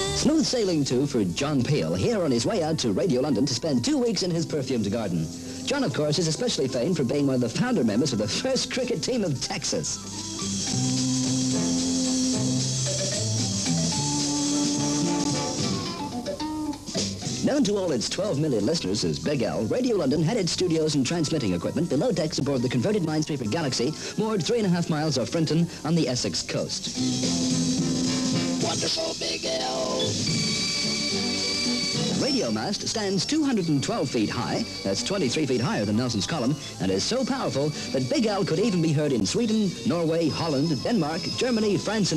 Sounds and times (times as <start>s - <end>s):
Music: 0.0s - 42.1s
Speech: 0.2s - 10.0s, 17.4s - 27.0s, 28.6s - 30.1s, 32.2s - 42.1s.